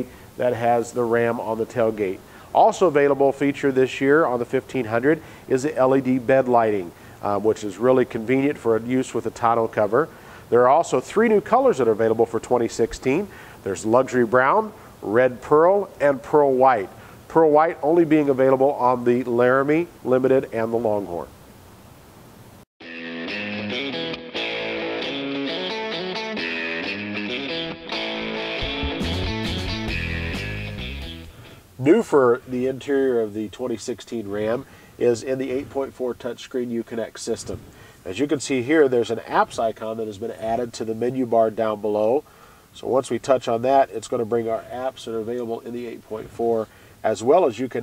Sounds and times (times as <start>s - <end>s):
Speech: 0.0s - 21.3s, 31.8s - 42.2s, 42.8s - 47.8s.